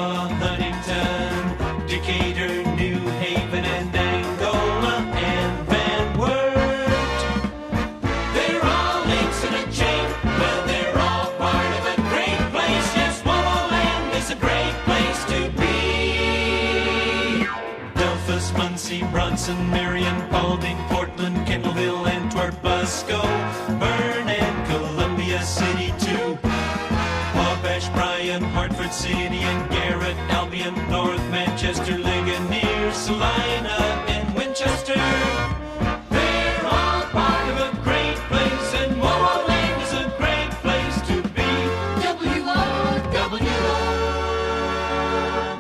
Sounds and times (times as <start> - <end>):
Music: 0.0 - 45.6.